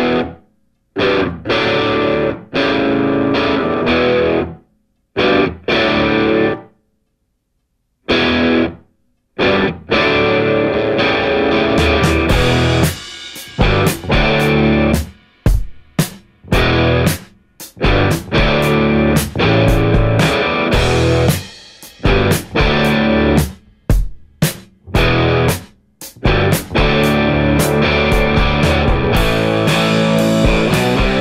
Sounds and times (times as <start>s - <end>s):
Music: 0.0s - 6.9s, 8.1s - 31.2s.